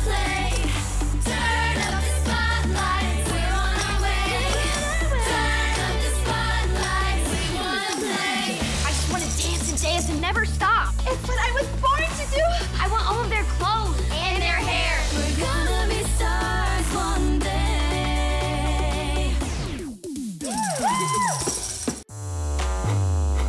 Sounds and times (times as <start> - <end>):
Female singing: 0.0 - 9.4, 14.1 - 19.4
Music: 0.0 - 23.4
Speech: 8.8 - 15.1.